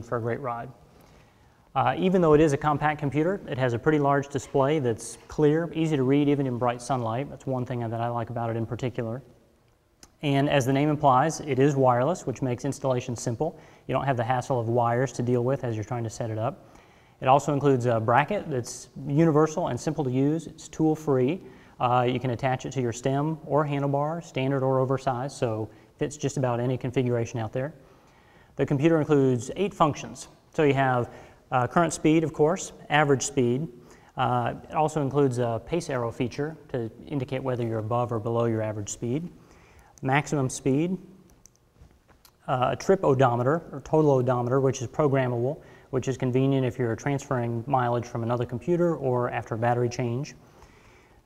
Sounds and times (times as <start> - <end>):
Speech: 0.0 - 0.8, 1.7 - 9.3, 10.0 - 16.6, 17.2 - 27.8, 28.6 - 39.4, 40.0 - 41.1, 42.4 - 50.4.